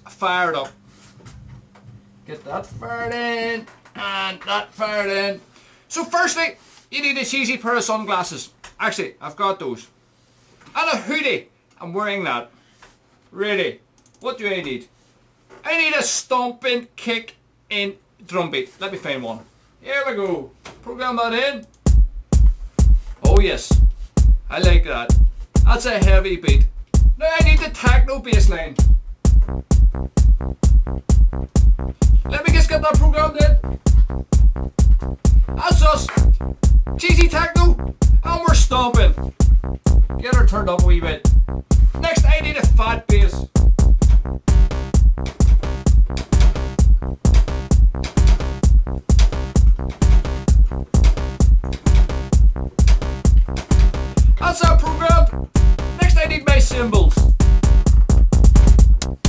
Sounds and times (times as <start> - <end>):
Speech: 0.0 - 0.8, 2.3 - 10.0, 10.8 - 12.5, 13.3 - 14.9, 15.6 - 21.7, 23.2 - 23.8, 24.5 - 25.1, 25.7 - 28.8, 32.3 - 33.6, 35.6 - 36.3, 37.0 - 39.2, 40.2 - 41.2, 42.0 - 43.4, 54.4 - 55.4, 56.0 - 57.2.